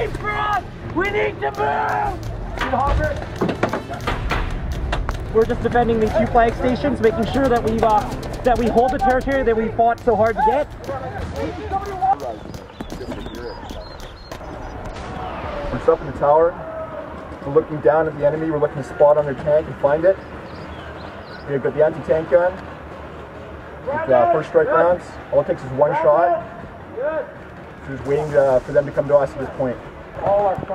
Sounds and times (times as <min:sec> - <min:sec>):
Music: 0:00.0 - 0:12.1.